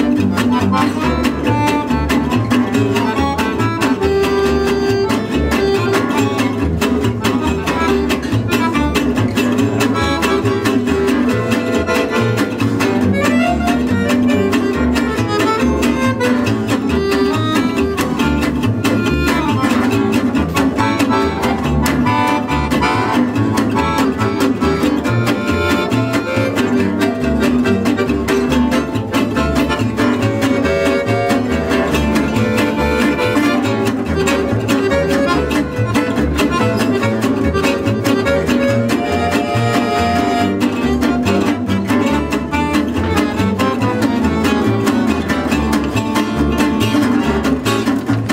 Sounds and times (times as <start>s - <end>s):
Accordion: 0.0s - 48.3s.